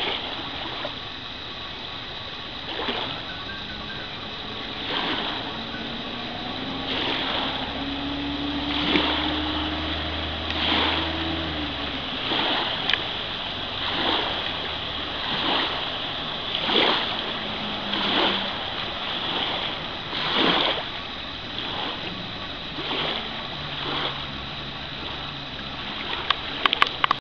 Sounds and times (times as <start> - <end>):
Boat, Water vehicle: 0.0 - 27.2.